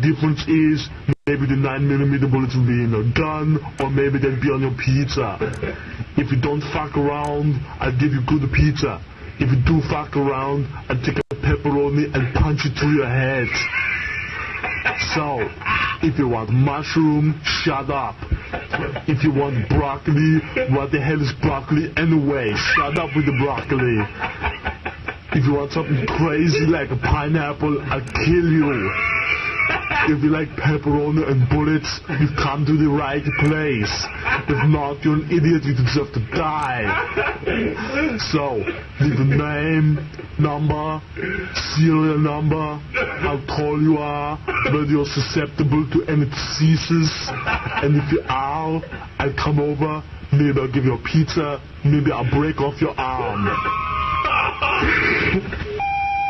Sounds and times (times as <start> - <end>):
Speech: 0.0 - 14.0, 14.9 - 24.3, 25.3 - 29.2, 29.9 - 37.2, 37.8 - 53.8.